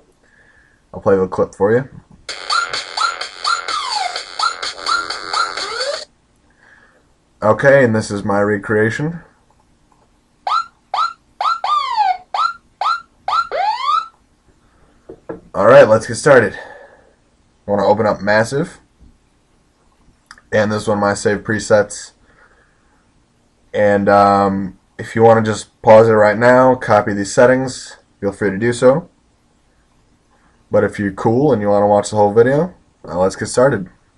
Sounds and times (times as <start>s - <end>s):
Speech: 0.9s - 2.0s, 7.4s - 9.3s, 15.5s - 16.7s, 17.7s - 18.9s, 20.3s - 22.2s, 23.7s - 29.1s, 30.7s - 34.0s.